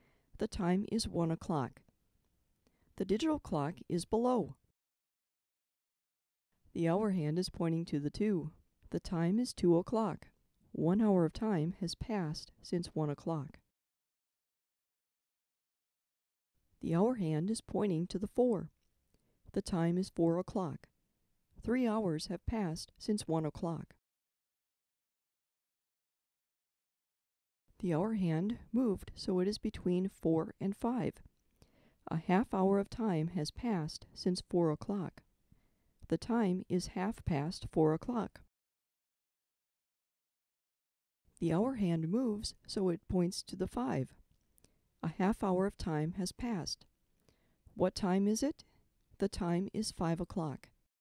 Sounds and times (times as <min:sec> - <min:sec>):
Speech: 0:00.4 - 0:01.8, 0:03.0 - 0:04.6, 0:06.7 - 0:13.6, 0:16.8 - 0:18.7, 0:19.5 - 0:20.9, 0:21.6 - 0:24.0, 0:27.8 - 0:31.2, 0:32.1 - 0:35.2, 0:36.1 - 0:38.4, 0:41.4 - 0:44.2, 0:45.0 - 0:46.8, 0:47.8 - 0:48.6, 0:49.2 - 0:50.7.